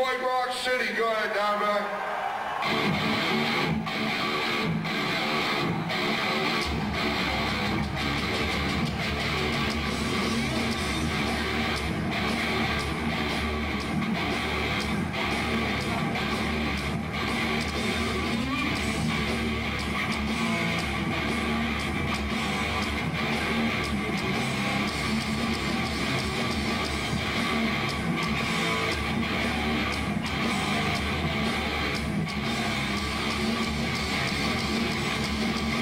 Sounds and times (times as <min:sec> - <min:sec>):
Music: 0:02.5 - 0:35.8.